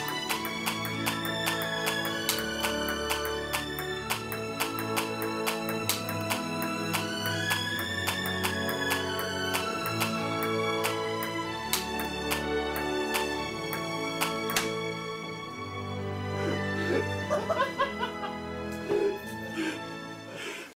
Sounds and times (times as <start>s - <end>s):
Music: 0.0s - 20.7s.